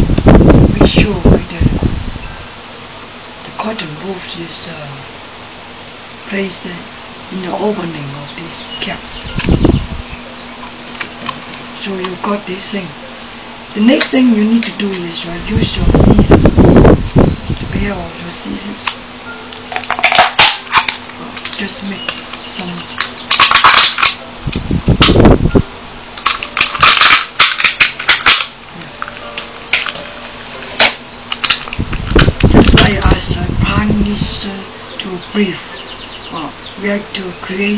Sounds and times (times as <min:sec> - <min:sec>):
Speech: 0:00.7 - 0:01.8, 0:03.5 - 0:05.1, 0:06.3 - 0:09.1, 0:11.8 - 0:13.0, 0:13.8 - 0:16.4, 0:17.6 - 0:19.0, 0:21.6 - 0:23.0, 0:32.7 - 0:37.7.